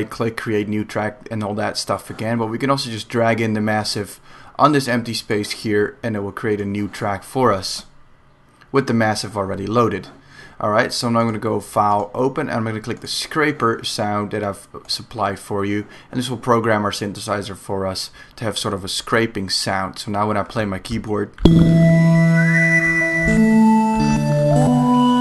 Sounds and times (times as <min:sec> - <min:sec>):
Speech: 0:00.0 - 0:08.0, 0:08.7 - 0:21.4.